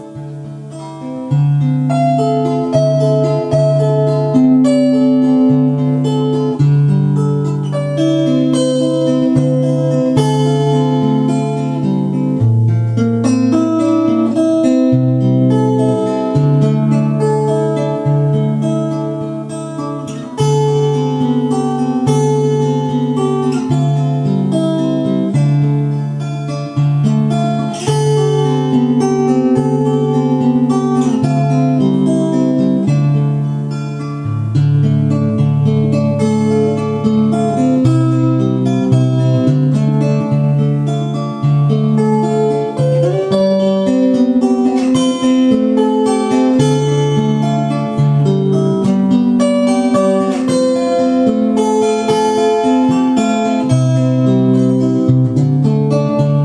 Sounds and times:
Acoustic guitar: 0:00.0 - 0:56.4
Strum: 0:00.0 - 0:56.4.

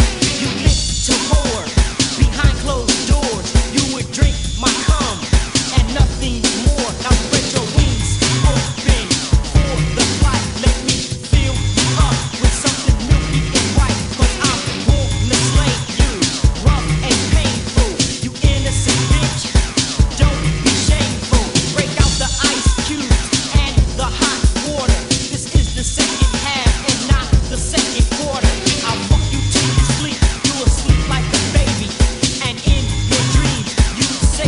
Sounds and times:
Music: 0:00.0 - 0:34.4.

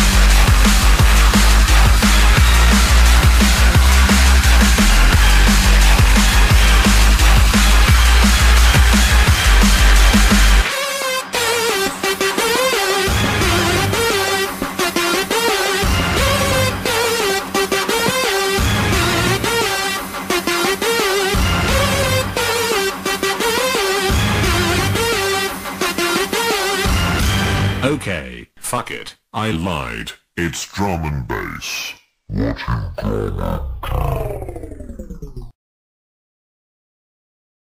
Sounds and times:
Music: 0:00.0 - 0:28.0
Speech: 0:27.8 - 0:34.7.

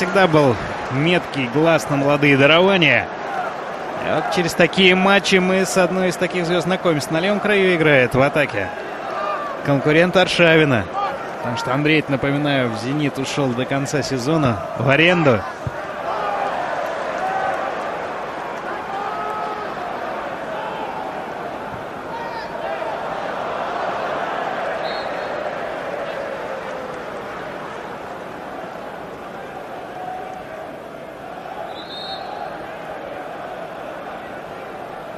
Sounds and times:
Speech: 0:00.0 - 0:03.1, 0:04.0 - 0:08.7, 0:09.7 - 0:15.5.

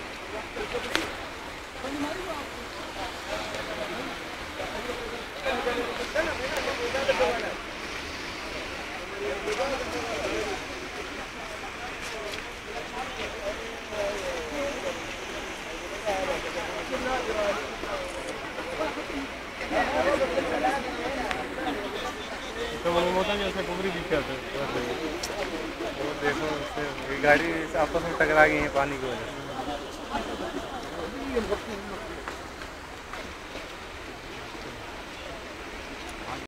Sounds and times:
Speech: 0:00.0 - 0:32.6, 0:33.9 - 0:36.4.

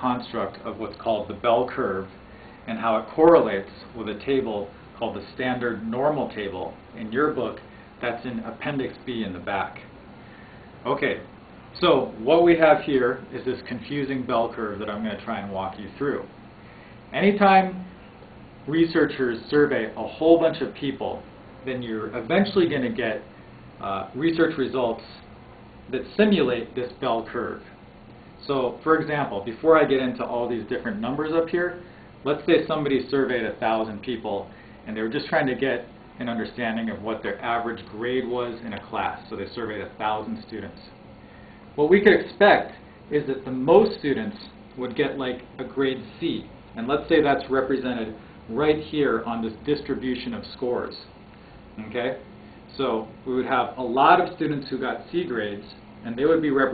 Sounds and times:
Speech: 0:00.0 - 0:09.9, 0:10.8 - 0:16.4, 0:17.1 - 0:17.9, 0:18.6 - 0:25.3, 0:25.9 - 0:27.8, 0:28.4 - 0:41.0, 0:41.8 - 0:51.2, 0:51.8 - 0:56.7.

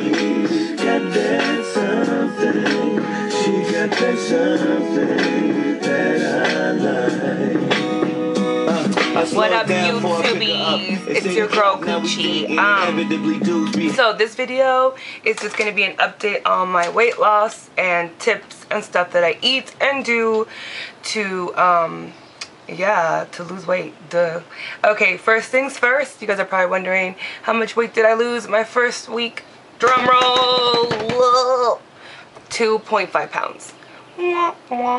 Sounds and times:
Speech: 0:09.2 - 0:13.0, 0:22.7 - 0:31.8.

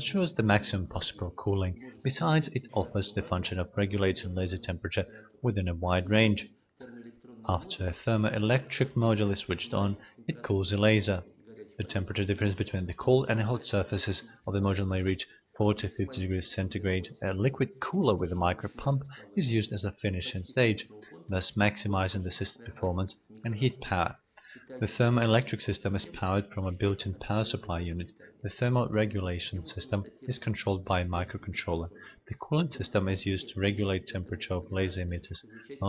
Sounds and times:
Speech: 0:00.0 - 0:35.8.

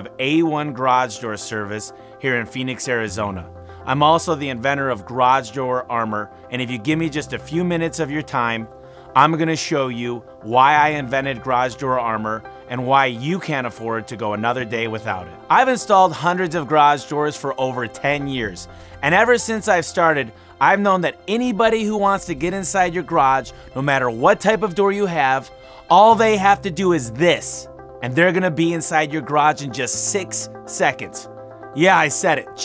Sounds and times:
Music: 0:00.0 - 0:32.6
Speech: 0:00.0 - 0:32.6.

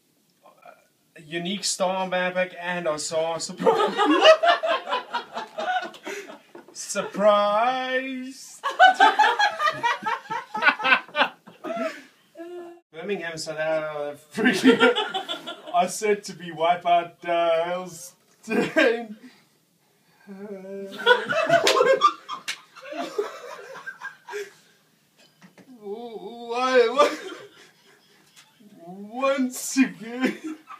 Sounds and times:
Narration, monologue: 0:00.1 - 0:10.9, 0:12.9 - 0:30.7
Male speech, man speaking: 0:00.5 - 0:03.8, 0:06.8 - 0:08.6, 0:13.0 - 0:14.9, 0:15.7 - 0:19.2, 0:25.8 - 0:27.3, 0:28.7 - 0:30.6.

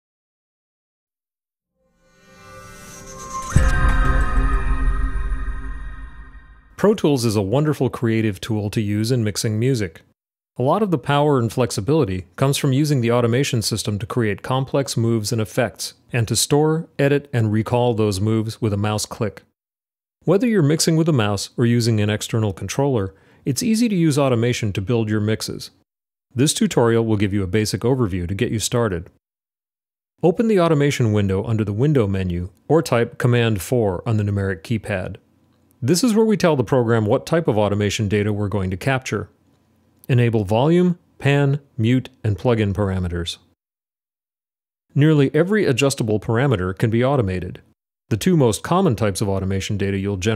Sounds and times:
Speech: 0:06.8 - 0:19.5, 0:20.2 - 0:29.2, 0:30.2 - 0:35.2, 0:35.8 - 0:39.4, 0:40.0 - 0:43.6, 0:44.9 - 0:50.3.

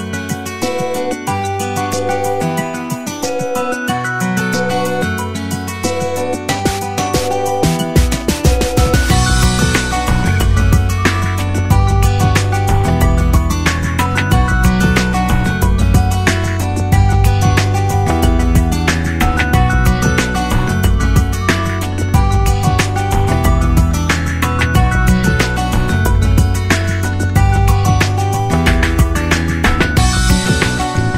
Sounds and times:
Music: 0:00.0 - 0:31.1.

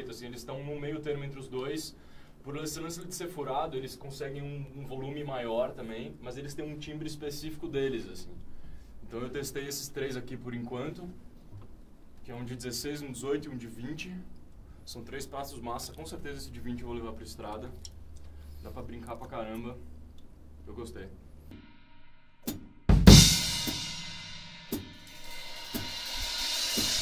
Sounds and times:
Speech: 0:00.0 - 0:08.4, 0:09.0 - 0:11.2, 0:12.2 - 0:14.3, 0:14.9 - 0:17.9, 0:18.6 - 0:19.9, 0:20.6 - 0:21.2.

